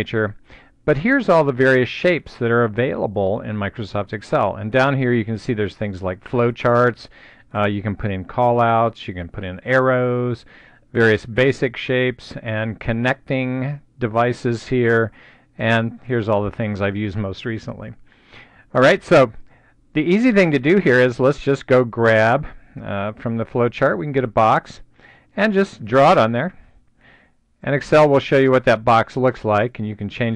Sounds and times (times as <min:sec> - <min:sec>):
Speech: 0:00.0 - 0:18.0, 0:18.7 - 0:19.4, 0:20.0 - 0:26.6, 0:27.6 - 0:30.3.